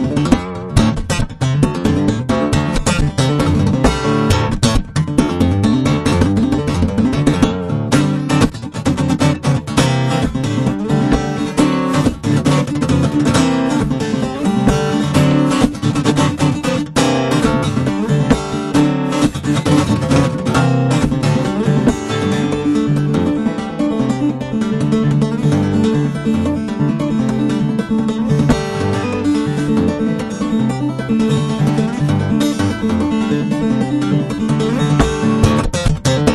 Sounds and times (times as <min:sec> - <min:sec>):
Acoustic guitar: 0:00.0 - 0:36.3
Strum: 0:00.0 - 0:36.3.